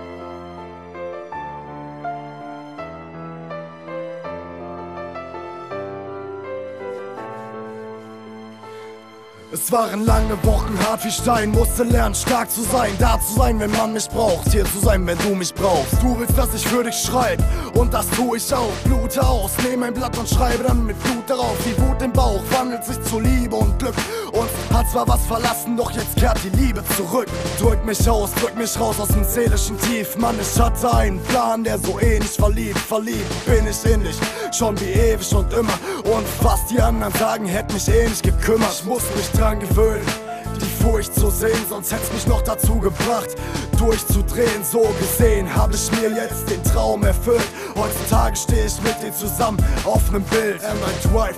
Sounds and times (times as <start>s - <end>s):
Music: 0.0s - 51.3s.